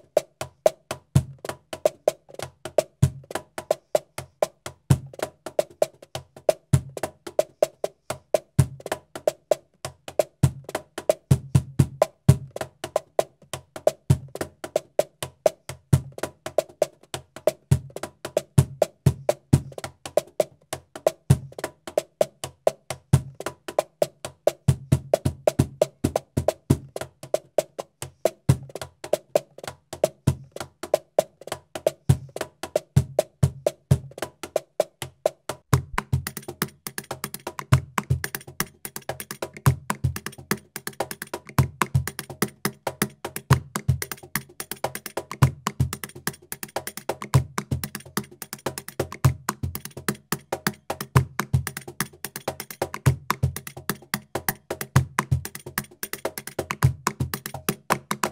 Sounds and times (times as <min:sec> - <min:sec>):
Music: 0:00.0 - 0:58.3.